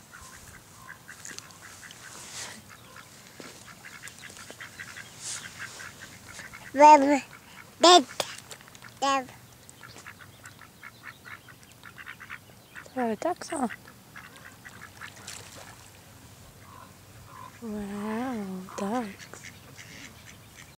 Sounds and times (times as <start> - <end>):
Quack: 0.1 - 9.0, 9.8 - 12.9, 13.5 - 15.8, 16.6 - 17.6, 18.7 - 20.7
Speech: 12.9 - 13.8, 17.6 - 19.2.